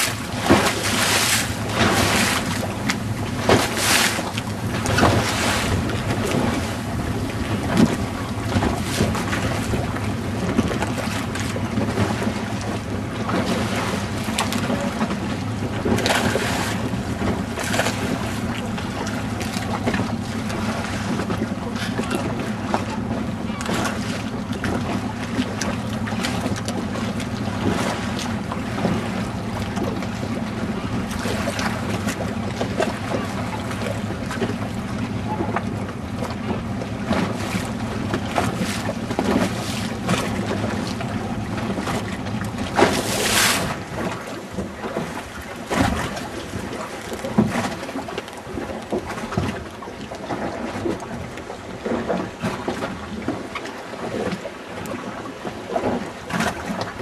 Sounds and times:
Rowboat, canoe, kayak: 0.0s - 57.0s.

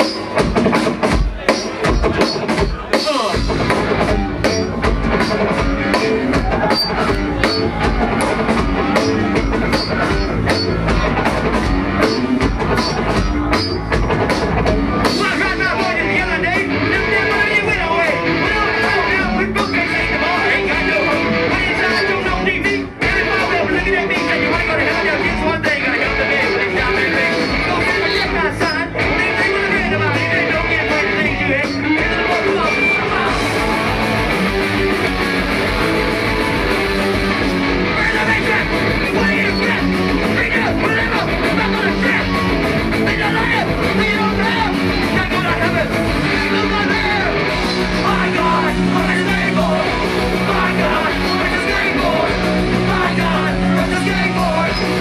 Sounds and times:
Music: 0.0s - 55.0s.

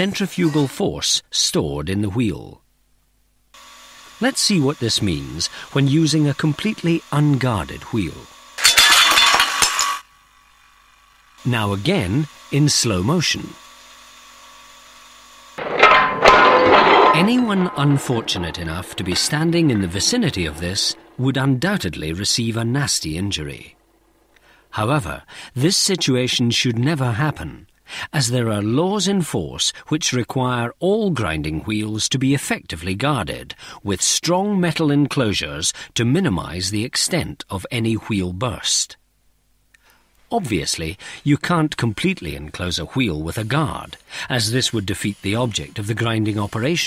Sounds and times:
Power tool: 3.6s - 23.8s, 43.4s - 46.8s.

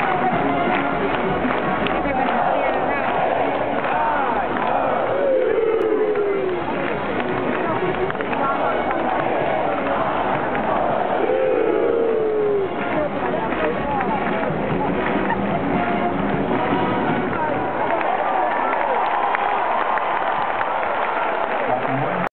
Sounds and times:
Music: 0.0s - 22.3s
Speech: 1.8s - 10.5s, 12.4s - 16.0s, 21.5s - 22.3s.

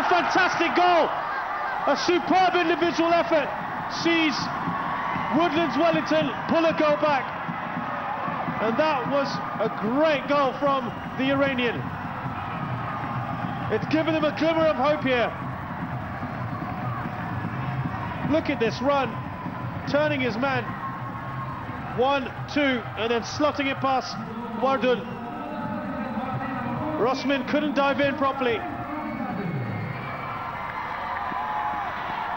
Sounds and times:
Speech: 1.9s - 4.5s, 5.4s - 7.2s, 8.6s - 11.8s, 13.7s - 15.4s, 18.2s - 19.1s, 19.9s - 20.7s, 22.0s - 29.6s.

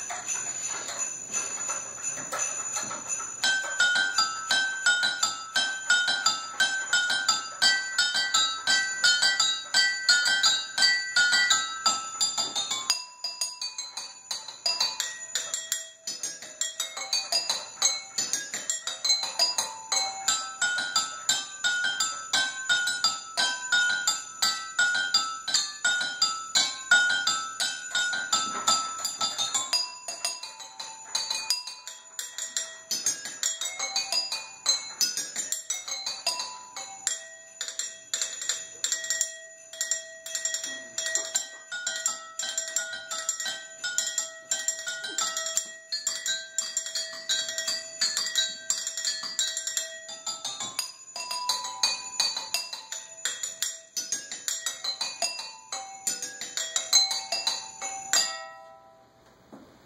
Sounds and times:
Glass: 0.0s - 59.2s.

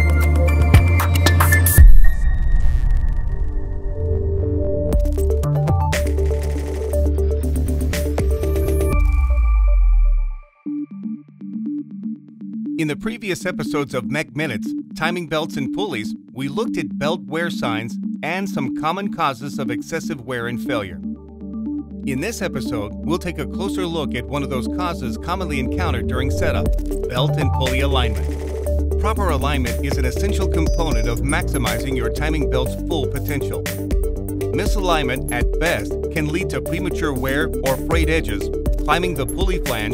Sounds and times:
Music: 0.0s - 39.9s
Speech: 12.8s - 21.0s, 22.1s - 28.2s, 29.0s - 33.6s, 34.6s - 39.9s.

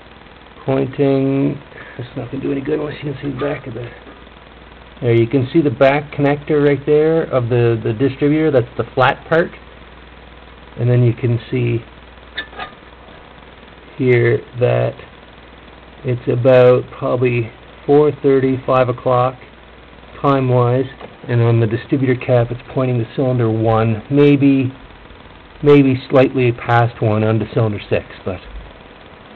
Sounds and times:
Speech: 0.6s - 4.1s, 5.0s - 9.6s, 10.8s - 11.9s, 14.0s - 15.1s, 16.0s - 19.5s, 20.2s - 24.8s, 25.6s - 28.6s.

